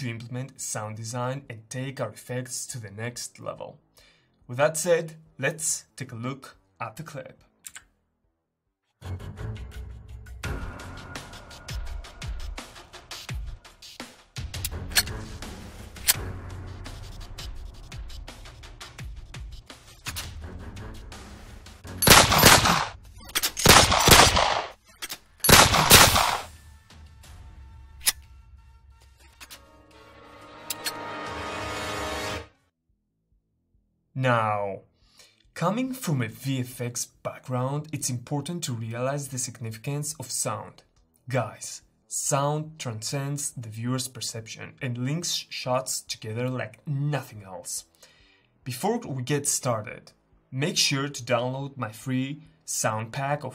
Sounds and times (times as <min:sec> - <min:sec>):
Gunshot, gunfire: 0:22.0 - 0:23.0, 0:23.6 - 0:24.8, 0:25.5 - 0:26.5.